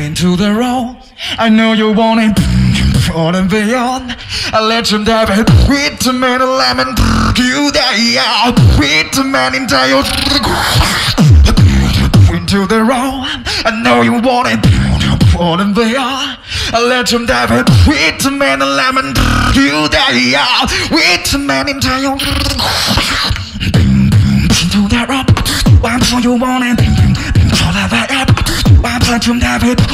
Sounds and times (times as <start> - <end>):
Music: 4.8 - 12.7, 14.4 - 15.4, 22.2 - 29.9.